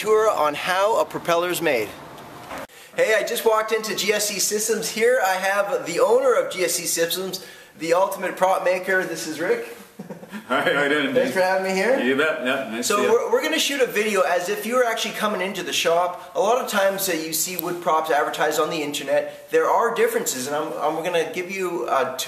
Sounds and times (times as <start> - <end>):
Speech: 0.0 - 2.0, 3.0 - 9.7, 10.5 - 22.2.